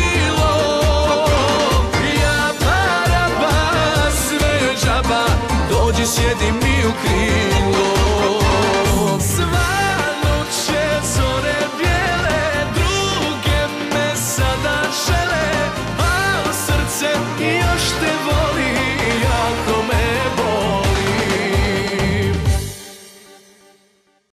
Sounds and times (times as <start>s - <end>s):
Music: 0.0s - 24.3s.